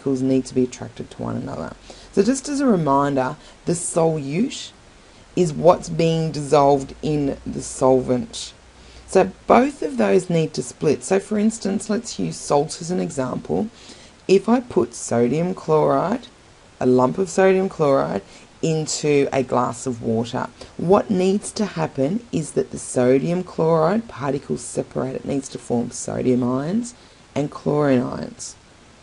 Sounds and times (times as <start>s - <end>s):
Speech: 0.0s - 4.8s, 5.4s - 28.6s.